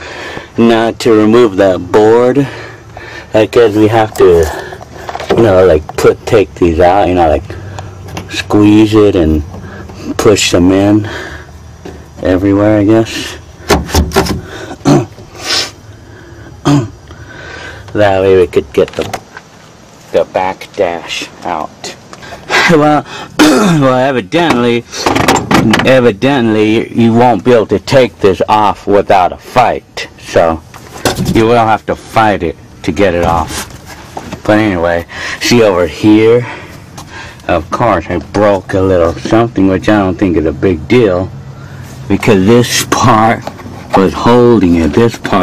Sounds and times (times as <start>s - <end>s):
Speech: 0.6s - 2.5s, 3.3s - 4.7s, 5.3s - 7.5s, 8.3s - 9.5s, 10.1s - 11.1s, 12.2s - 13.4s, 18.0s - 19.2s, 20.1s - 22.0s, 22.6s - 24.9s, 25.6s - 30.6s, 31.2s - 33.7s, 34.4s - 36.6s, 37.5s - 41.4s, 42.1s - 45.4s.